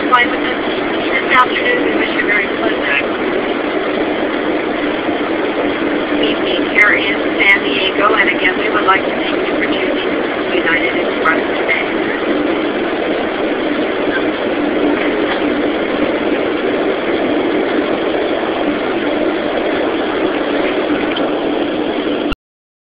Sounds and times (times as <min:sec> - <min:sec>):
Heavy engine (low frequency): 0:00.0 - 0:22.4.